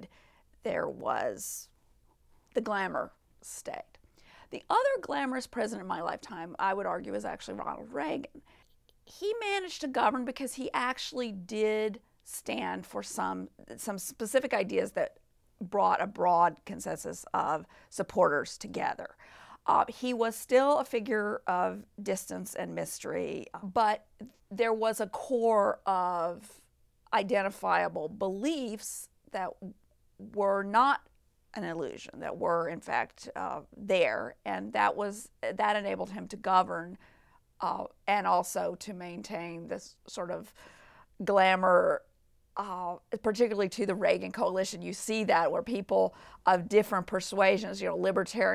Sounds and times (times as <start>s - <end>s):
Speech: 0.7s - 1.7s, 2.6s - 8.4s, 9.1s - 37.0s, 37.6s - 40.5s, 41.2s - 48.5s.